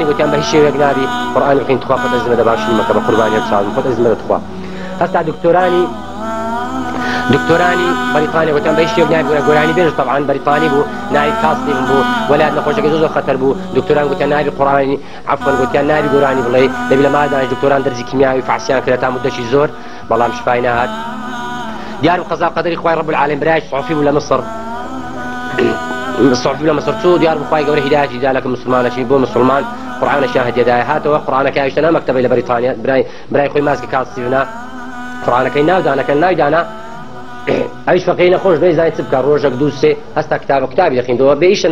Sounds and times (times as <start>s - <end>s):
Speech: 0.0s - 6.0s, 7.2s - 21.0s, 22.0s - 24.5s, 25.5s - 34.5s, 35.2s - 36.7s, 37.5s - 41.7s.